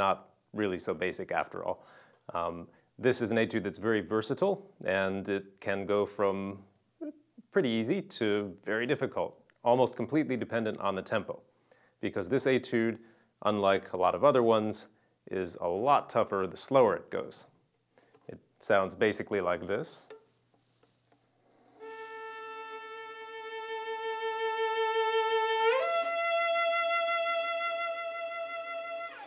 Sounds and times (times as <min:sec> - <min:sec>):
Speech: 0:00.0 - 0:17.6, 0:18.3 - 0:20.1
Violin, fiddle: 0:21.5 - 0:29.2.